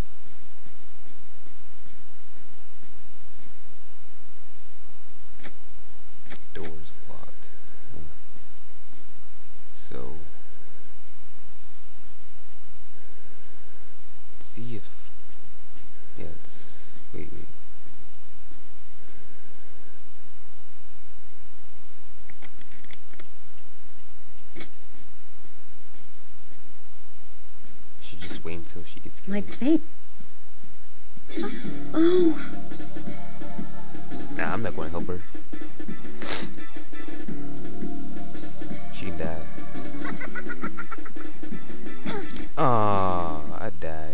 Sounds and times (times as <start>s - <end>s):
Speech: 6.5s - 7.5s, 34.4s - 35.2s, 42.6s - 44.1s.